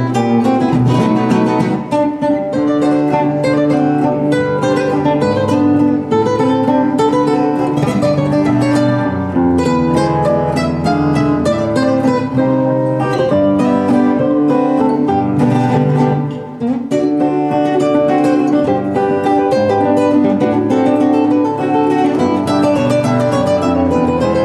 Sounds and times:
Acoustic guitar: 0:00.0 - 0:24.4
Strum: 0:00.0 - 0:24.4.

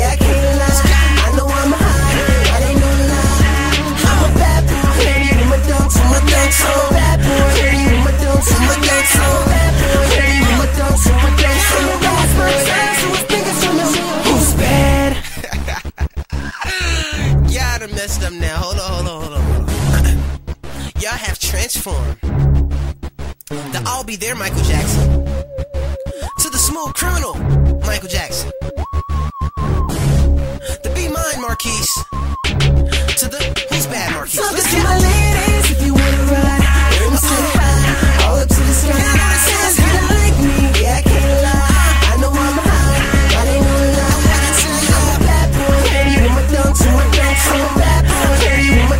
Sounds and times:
Hip hop music: 0:00.0 - 0:48.9
Speech: 0:16.6 - 0:20.1, 0:21.0 - 0:22.2, 0:23.5 - 0:25.1, 0:26.4 - 0:28.5, 0:30.8 - 0:32.0, 0:33.2 - 0:34.5.

